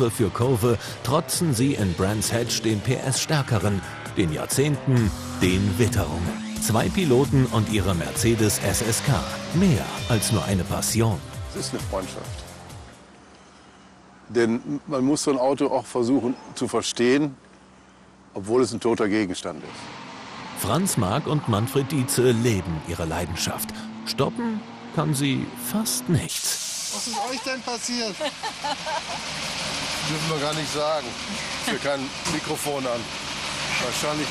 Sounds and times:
Car: 0.0 - 14.3, 17.3 - 34.3.

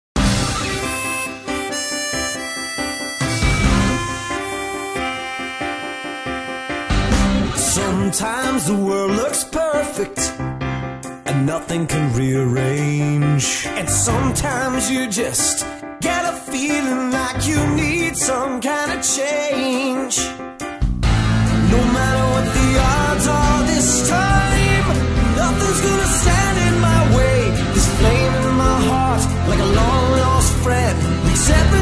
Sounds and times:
Theme music: 0.2 - 9.0, 20.7 - 31.8.

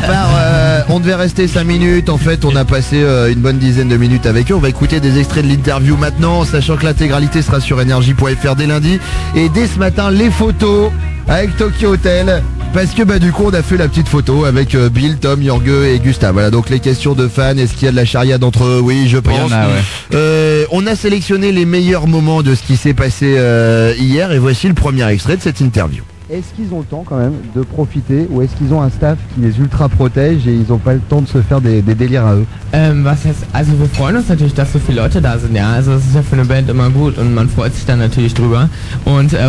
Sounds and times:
Music: 0.0 - 39.4
Speech: 0.0 - 39.4.

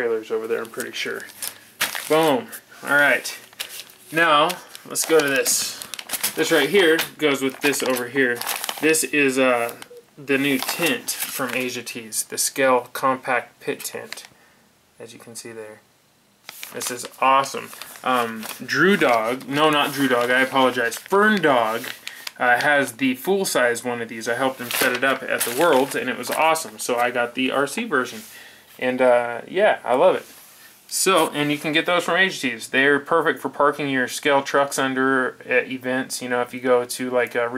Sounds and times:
Speech: 0.0 - 1.3, 2.1 - 3.4, 4.1 - 5.8, 6.4 - 14.3, 15.0 - 15.9, 16.7 - 30.3, 30.9 - 37.5
Inside, small room: 0.0 - 37.5.

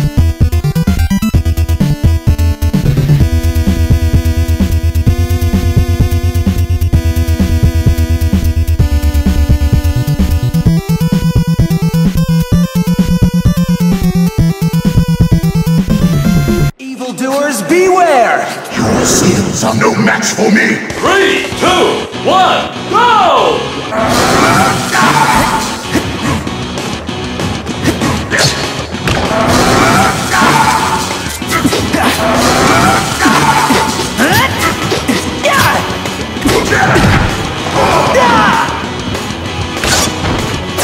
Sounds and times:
Music: 0.0 - 17.5, 18.4 - 40.8.

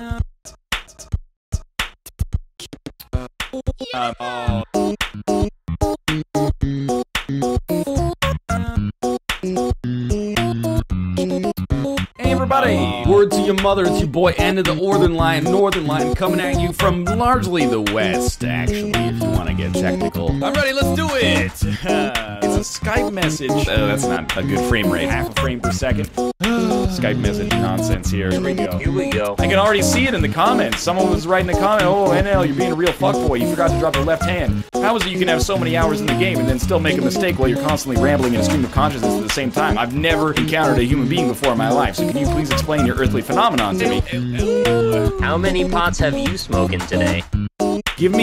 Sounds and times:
Music: 0.0 - 48.2
Speech: 3.8 - 4.7, 12.2 - 47.2, 48.0 - 48.2.

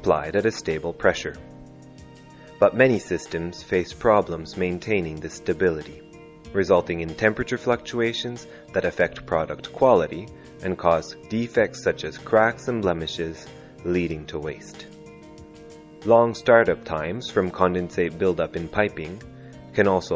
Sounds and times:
Speech: 0.0 - 1.4, 2.6 - 6.0, 6.6 - 14.9, 16.0 - 19.2, 19.8 - 20.1
Music: 0.0 - 20.1.

